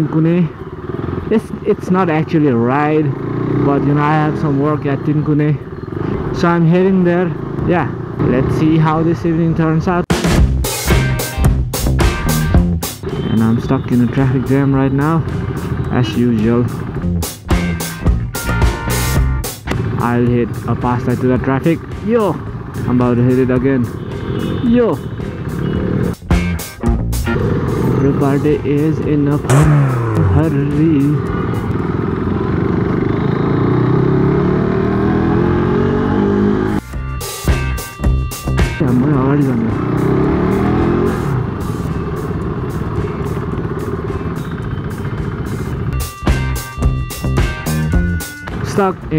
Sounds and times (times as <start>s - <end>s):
Outside, urban or manmade: 0.0s - 49.1s
Music: 10.1s - 31.9s, 36.6s - 49.1s.